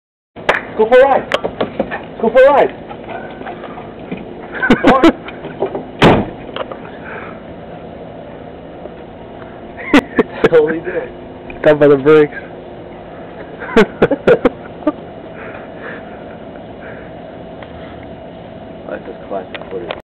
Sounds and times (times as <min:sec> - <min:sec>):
Speech: 0:18.9 - 0:20.0.